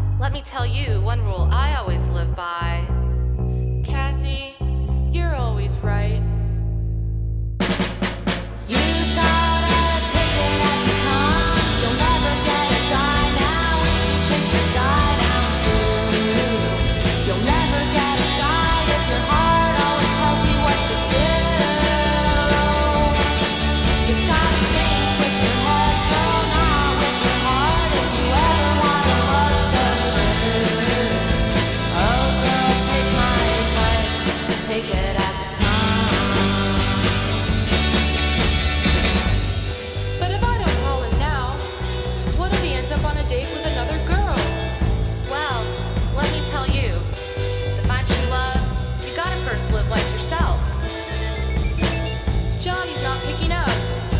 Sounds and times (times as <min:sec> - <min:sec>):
Blues: 0:07.6 - 0:54.1.